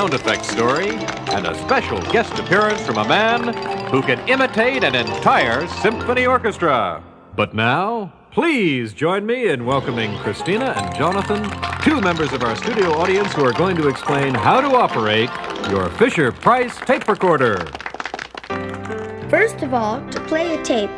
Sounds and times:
Speech: 0.0s - 17.7s, 19.3s - 20.9s.

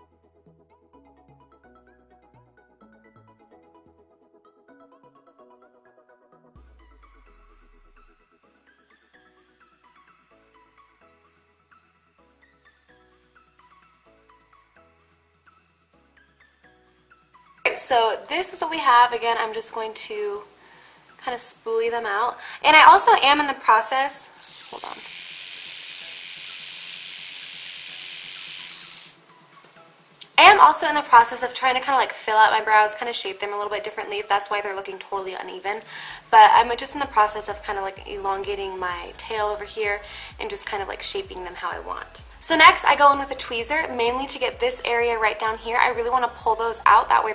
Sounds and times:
Music: 0.0s - 47.3s
Speech: 17.7s - 20.5s, 21.2s - 25.0s, 30.4s - 47.3s.

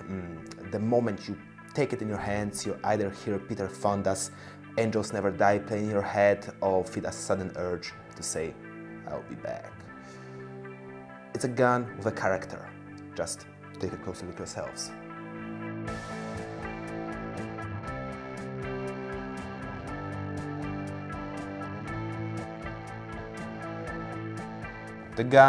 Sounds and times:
Speech: 0.0s - 9.8s, 11.4s - 15.0s, 25.2s - 25.4s
Music: 0.0s - 25.4s.

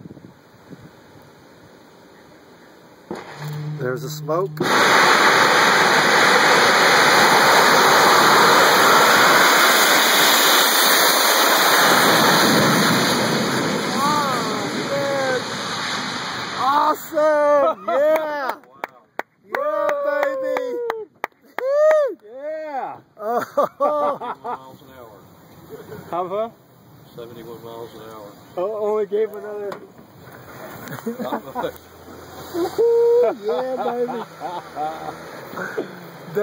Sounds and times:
Vehicle: 0.0s - 17.4s, 23.6s - 36.4s.

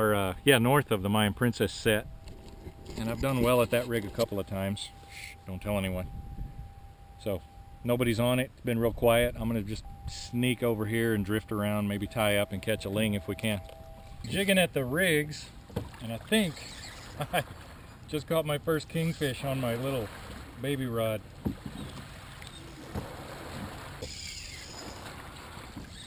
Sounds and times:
Waves, surf: 15.5s - 26.0s.

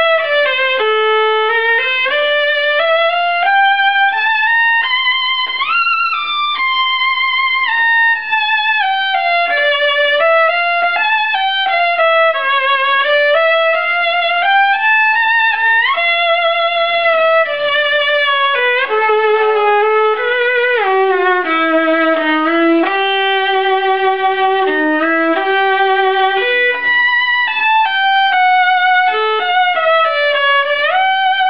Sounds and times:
Violin, fiddle: 0.0s - 31.5s.

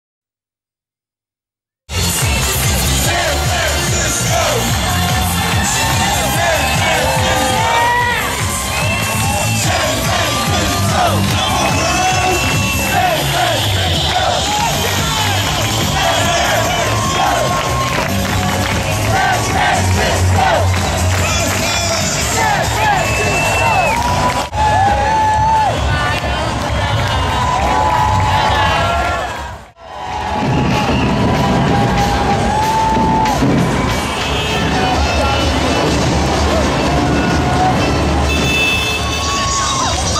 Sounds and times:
Music: 1.9s - 40.1s
Whoop: 5.1s - 13.5s, 16.1s - 18.2s, 22.8s - 26.2s, 27.0s - 34.0s, 39.1s - 40.1s.

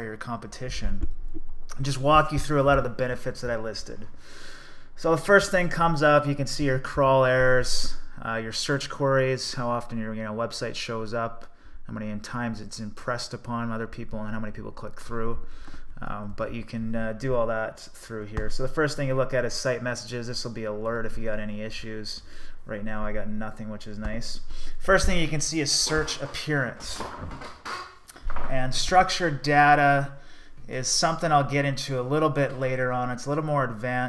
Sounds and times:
Speech: 0.0s - 1.1s, 1.7s - 4.1s, 5.0s - 15.4s, 16.0s - 27.3s, 28.3s - 34.0s.

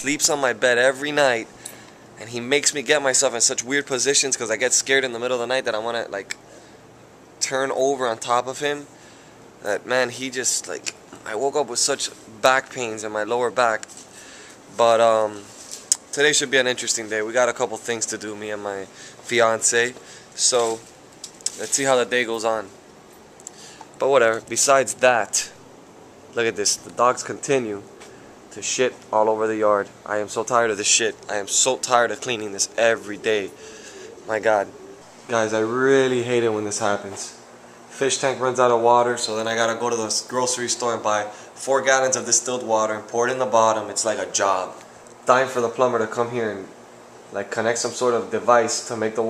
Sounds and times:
Speech: 0.0s - 1.5s, 2.2s - 6.4s, 7.4s - 8.9s, 9.6s - 13.9s, 14.7s - 20.9s, 21.5s - 22.8s, 24.0s - 25.6s, 26.4s - 27.9s, 28.5s - 33.6s, 34.3s - 49.2s.

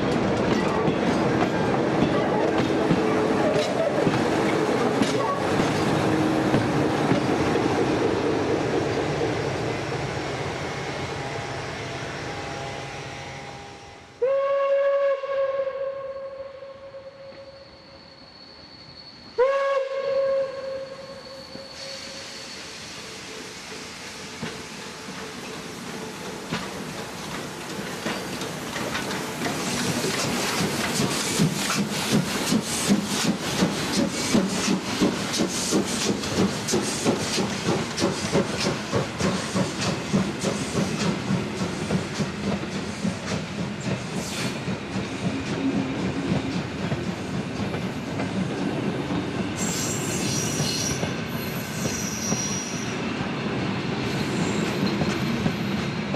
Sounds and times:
Railroad car, train wagon: 0.0s - 56.1s
Train: 0.0s - 56.1s.

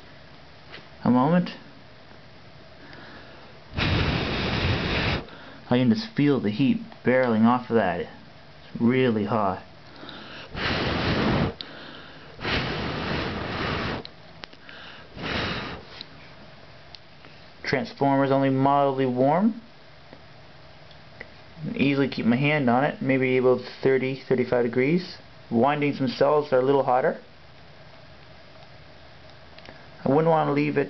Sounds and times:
Speech: 1.0s - 1.7s, 5.7s - 9.7s, 17.6s - 19.7s, 21.6s - 27.3s, 30.0s - 30.8s.

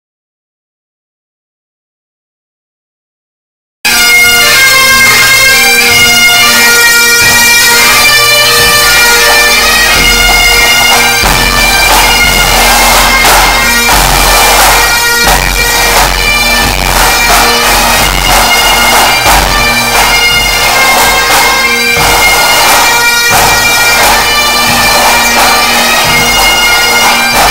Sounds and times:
Bagpipes: 3.9s - 27.5s.

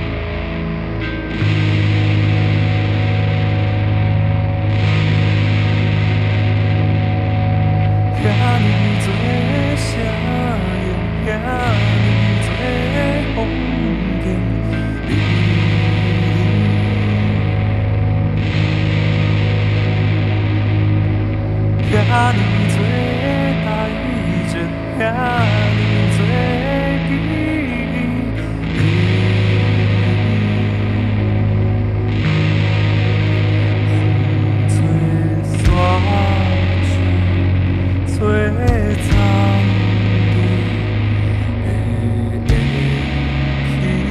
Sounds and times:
Music: 0.0s - 44.1s.

